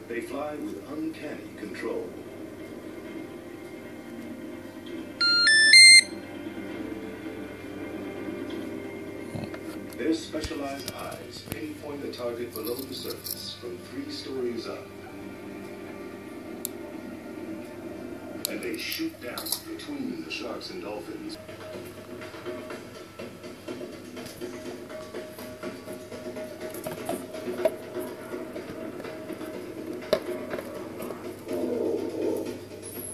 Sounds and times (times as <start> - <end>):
Speech: 0.0 - 2.2, 10.0 - 14.9, 18.5 - 21.4
Music: 0.0 - 33.1.